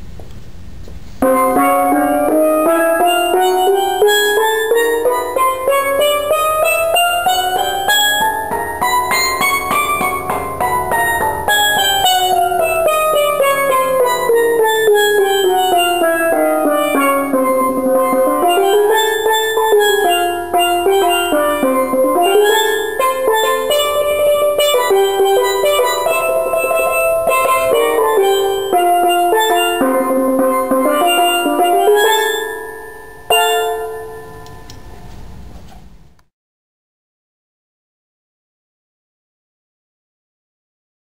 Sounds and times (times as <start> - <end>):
Steelpan: 1.2 - 35.0.